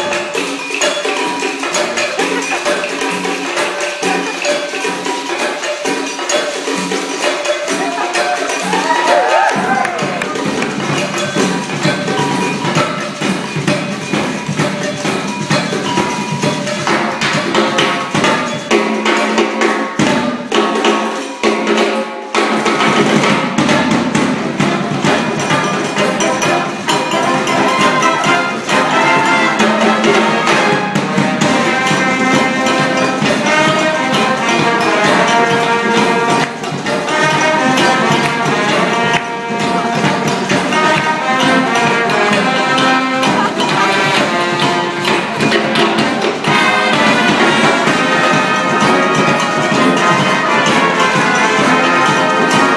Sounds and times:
Glockenspiel: 0:00.0 - 0:20.0, 0:24.6 - 0:52.7
Marimba, xylophone: 0:00.0 - 0:52.7.

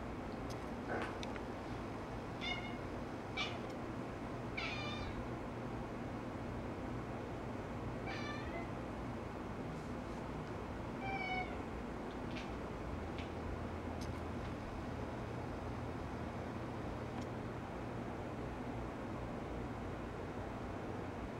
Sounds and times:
Meow: 0:02.4 - 0:03.6, 0:04.6 - 0:05.3, 0:08.0 - 0:08.8, 0:11.0 - 0:11.6.

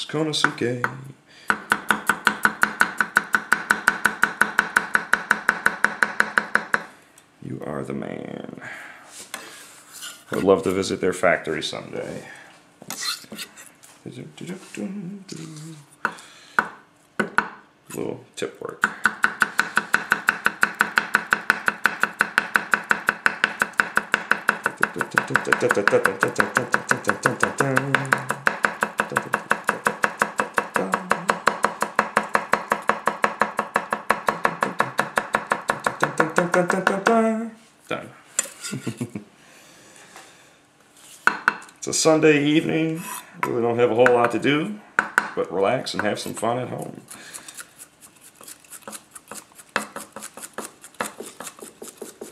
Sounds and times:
Speech: 0:00.0 - 0:01.2, 0:07.4 - 0:08.7, 0:10.3 - 0:12.4, 0:14.0 - 0:15.8, 0:17.9 - 0:18.8, 0:41.8 - 0:44.8, 0:45.4 - 0:47.1.

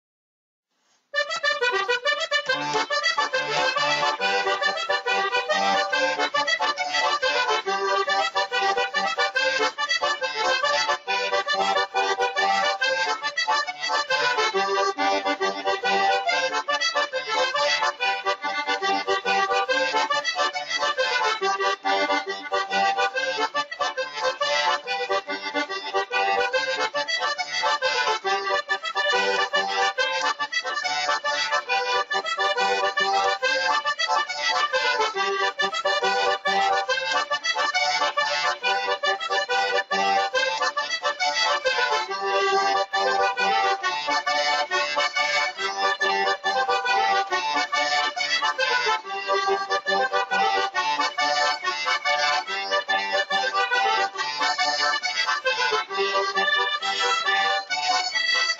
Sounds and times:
Accordion: 0:01.1 - 0:58.5.

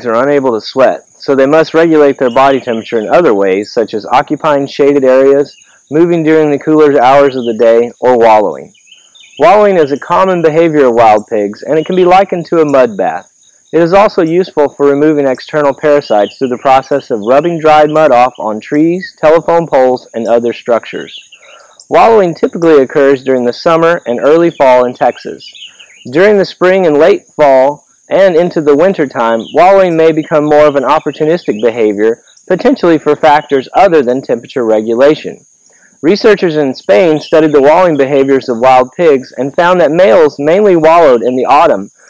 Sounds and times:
Speech: 0:00.0 - 0:08.7, 0:09.4 - 0:13.2, 0:13.8 - 0:21.1, 0:21.9 - 0:25.5, 0:26.1 - 0:35.4, 0:36.0 - 0:41.9.

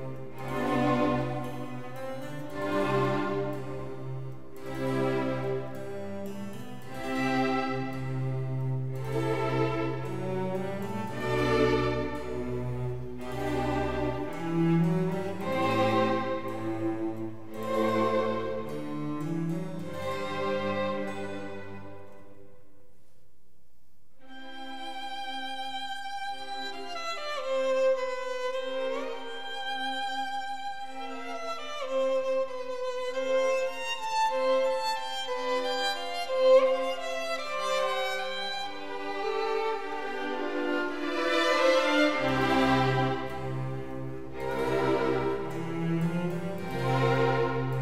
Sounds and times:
Violin, fiddle: 0:00.0 - 0:22.3, 0:24.2 - 0:47.8.

